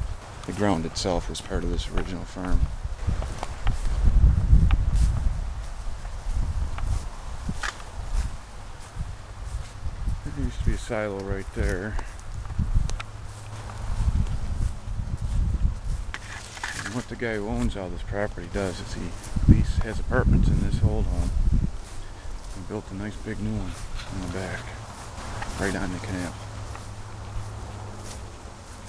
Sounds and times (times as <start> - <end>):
Speech: 0.4 - 2.7, 10.2 - 12.2, 16.8 - 21.4, 22.5 - 24.8, 25.5 - 26.4.